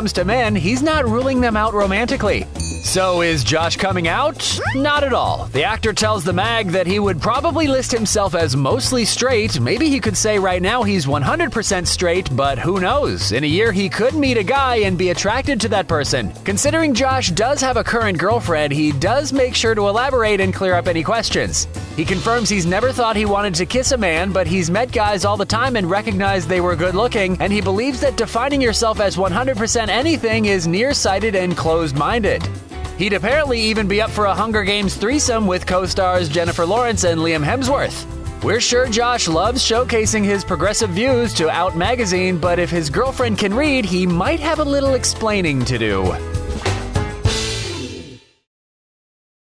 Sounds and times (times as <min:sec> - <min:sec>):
Speech: 0:00.0 - 0:46.2
Music: 0:00.0 - 0:48.5.